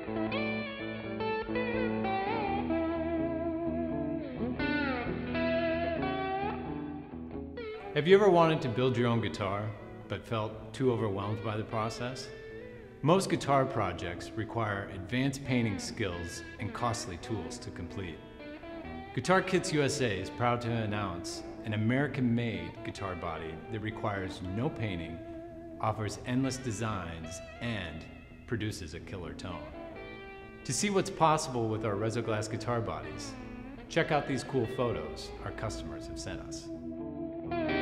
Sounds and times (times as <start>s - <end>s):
Speech: 8.0s - 12.3s, 13.0s - 18.2s, 19.2s - 25.2s, 25.8s - 29.8s, 30.7s - 36.7s.